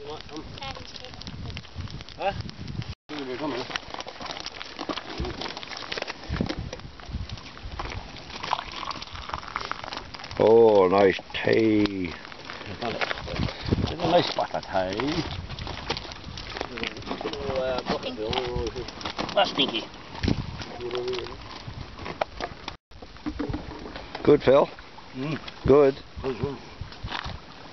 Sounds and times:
Outside, rural or natural: 0:00.0 - 0:27.7.

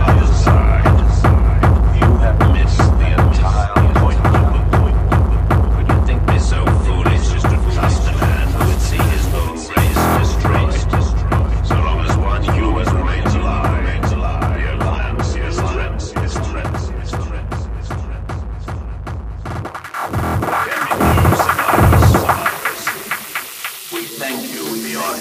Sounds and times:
Speech: 0:00.0 - 0:18.3, 0:20.5 - 0:23.2, 0:23.9 - 0:25.2
Music: 0:00.0 - 0:25.2
Throbbing: 0:07.1 - 0:10.8, 0:17.9 - 0:24.4.

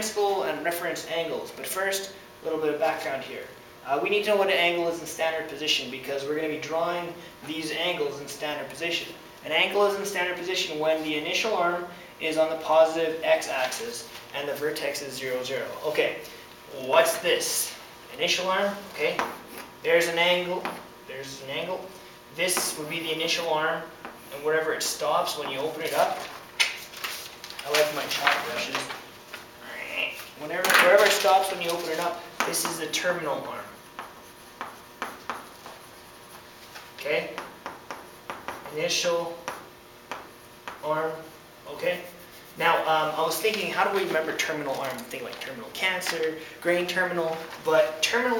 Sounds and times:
Speech: 0:00.0 - 0:26.3, 0:27.6 - 0:29.0, 0:29.6 - 0:33.8, 0:37.0 - 0:37.5, 0:38.7 - 0:39.6, 0:40.8 - 0:48.3
Inside, small room: 0:00.0 - 0:48.3.

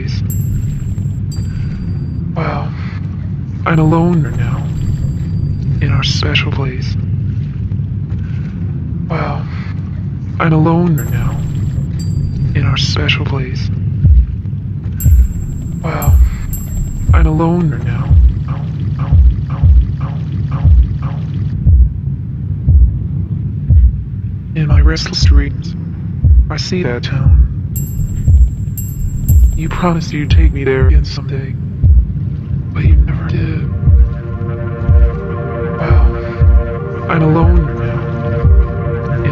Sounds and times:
Speech: 0:02.4 - 0:03.0, 0:03.7 - 0:04.8, 0:05.8 - 0:07.0, 0:09.1 - 0:09.8, 0:10.4 - 0:11.4, 0:12.6 - 0:13.8, 0:17.2 - 0:18.2, 0:24.6 - 0:25.8, 0:26.5 - 0:27.5, 0:29.6 - 0:31.6, 0:32.8 - 0:33.8, 0:37.1 - 0:38.1.

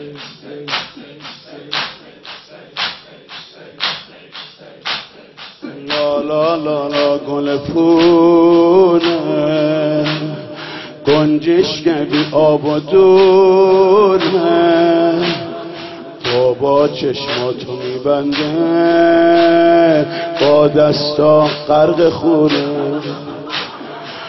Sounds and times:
Music: 0:05.9 - 0:24.2.

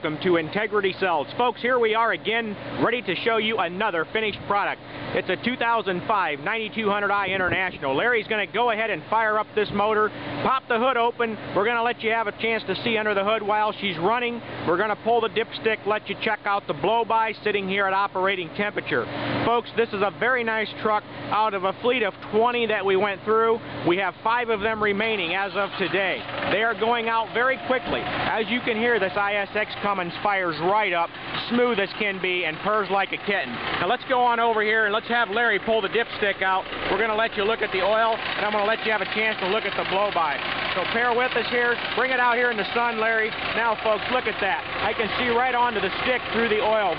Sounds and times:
Speech: 0:00.0 - 0:46.9
Truck: 0:00.0 - 0:46.9.

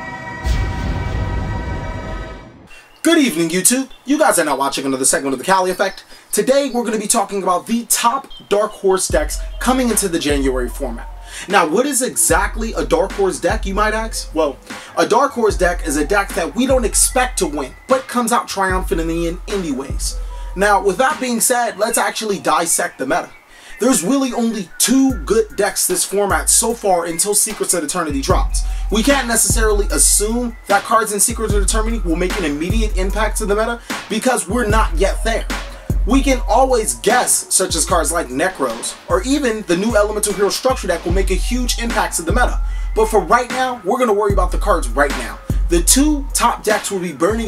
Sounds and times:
Music: 0:00.0 - 0:47.4
Speech: 0:03.0 - 0:47.4.

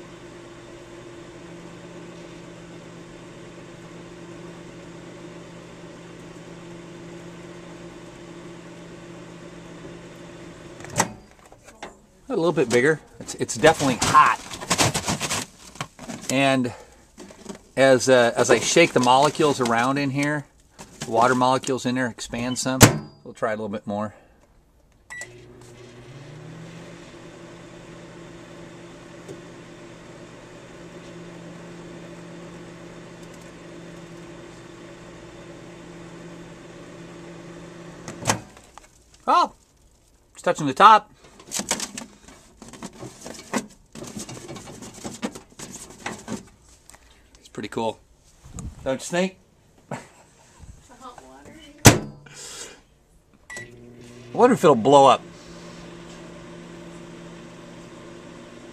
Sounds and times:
Microwave oven: 0:00.0 - 0:11.4, 0:25.1 - 0:38.7, 0:53.5 - 0:58.7
Speech: 0:11.7 - 0:14.5, 0:16.3 - 0:16.8, 0:17.8 - 0:24.2, 0:39.3 - 0:39.6, 0:40.4 - 0:41.1, 0:47.4 - 0:48.0, 0:48.8 - 0:49.4, 0:50.9 - 0:51.8, 0:54.4 - 0:55.2.

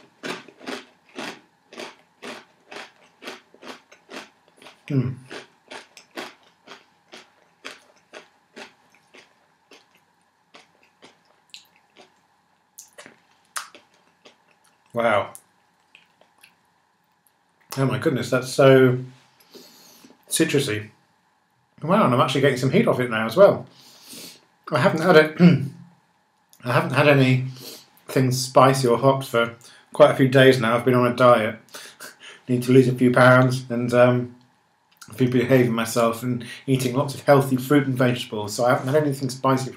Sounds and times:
Inside, small room: 0:00.0 - 0:39.7.

